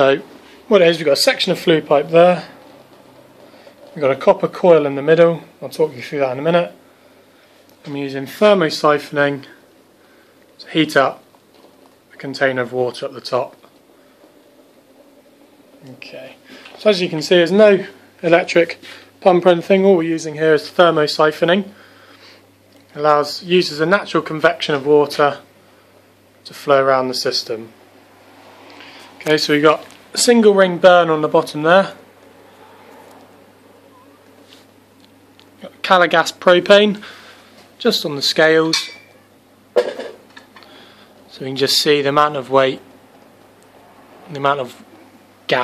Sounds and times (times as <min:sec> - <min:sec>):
Speech: 0:00.0 - 0:02.6, 0:04.0 - 0:06.8, 0:07.8 - 0:09.6, 0:10.6 - 0:11.2, 0:12.1 - 0:13.6, 0:15.8 - 0:21.8, 0:22.9 - 0:25.5, 0:26.4 - 0:27.8, 0:29.2 - 0:32.0, 0:35.6 - 0:37.0, 0:37.8 - 0:38.8, 0:41.3 - 0:42.9, 0:44.3 - 0:44.8.